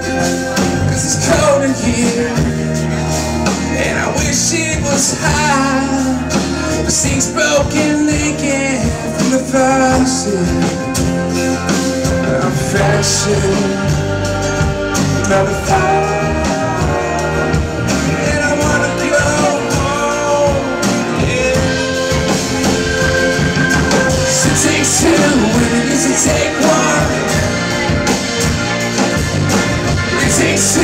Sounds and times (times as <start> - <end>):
Pop music: 0.0 - 30.8.